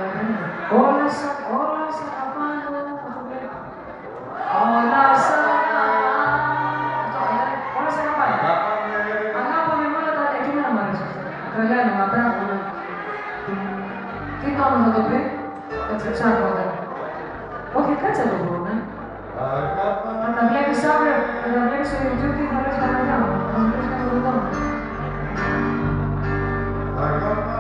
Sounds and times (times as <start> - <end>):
Inside, large room or hall: 0.0 - 27.6
Music: 0.0 - 27.6.